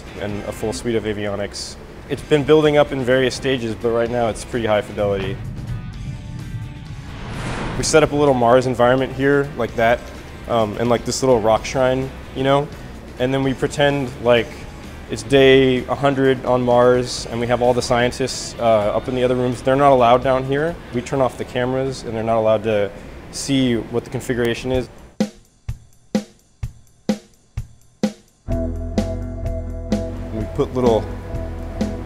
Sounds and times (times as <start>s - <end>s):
Speech: 0.0s - 5.4s, 7.8s - 24.9s, 30.3s - 31.1s
Music: 0.0s - 21.8s, 25.0s - 32.0s.